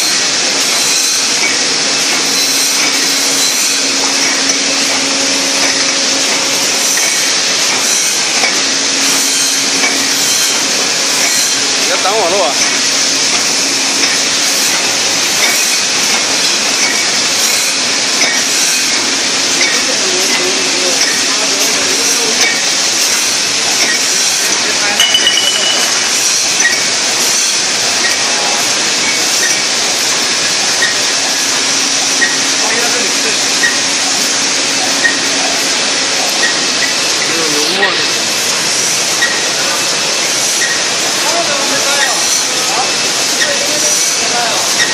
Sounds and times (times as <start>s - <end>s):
Speech: 11.8s - 12.6s, 19.6s - 22.6s, 32.6s - 33.6s, 37.3s - 38.2s, 41.1s - 44.8s.